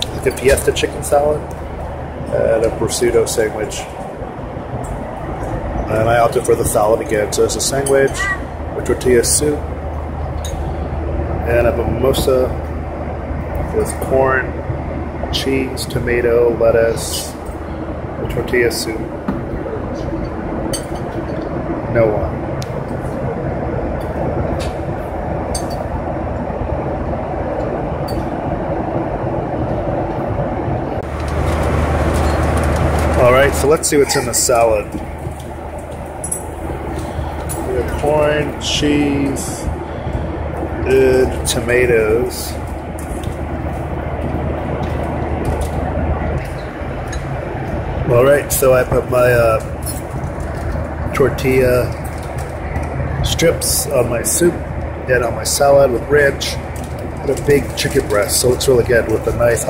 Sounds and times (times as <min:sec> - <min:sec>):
Speech: 0:00.0 - 0:01.4, 0:02.3 - 0:03.9, 0:05.9 - 0:09.6, 0:11.4 - 0:12.6, 0:13.7 - 0:14.5, 0:15.4 - 0:17.4, 0:18.2 - 0:19.1, 0:21.9 - 0:22.4, 0:33.2 - 0:35.0, 0:37.7 - 0:39.7, 0:40.8 - 0:42.6, 0:48.0 - 0:49.7, 0:51.1 - 0:52.0, 0:53.2 - 0:56.6, 0:57.2 - 0:59.7.